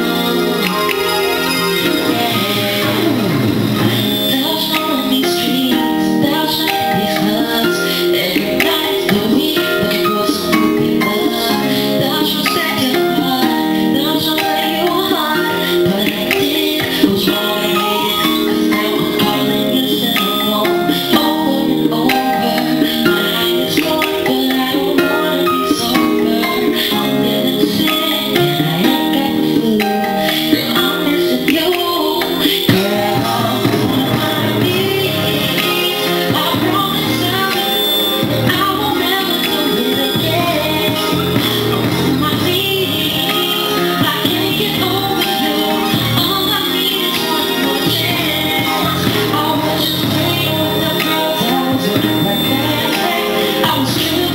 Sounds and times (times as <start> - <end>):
Music: 0.0 - 54.3
Male singing: 1.8 - 37.7.